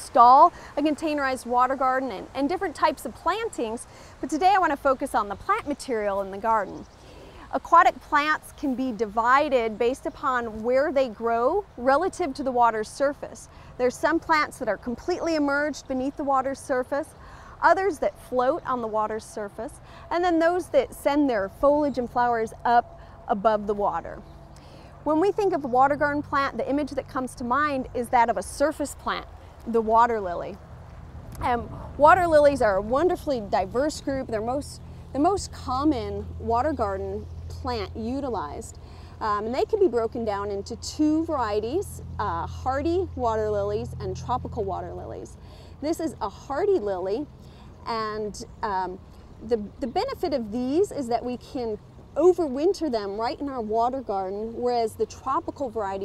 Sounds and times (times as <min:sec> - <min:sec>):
Speech: 0:00.0 - 0:06.8, 0:07.5 - 0:24.2, 0:25.1 - 0:30.6, 0:31.4 - 0:56.0.